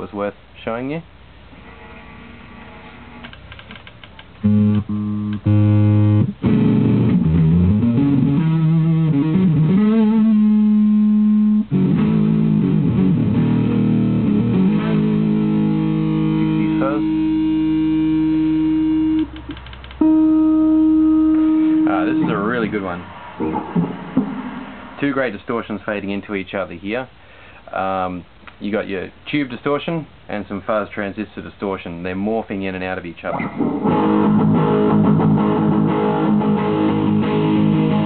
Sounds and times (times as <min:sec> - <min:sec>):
Speech: 0:00.0 - 0:01.1, 0:16.4 - 0:17.1, 0:21.8 - 0:23.6, 0:25.0 - 0:33.4
Inside, small room: 0:00.0 - 0:38.0
Music: 0:04.4 - 0:22.6, 0:33.6 - 0:38.0.